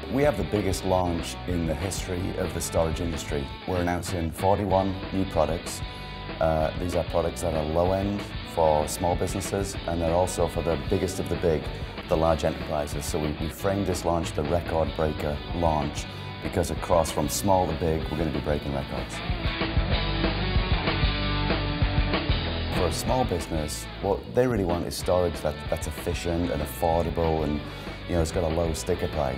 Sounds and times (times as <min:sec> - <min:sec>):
Speech: 0:00.0 - 0:19.2, 0:22.7 - 0:29.3
Music: 0:00.0 - 0:29.3.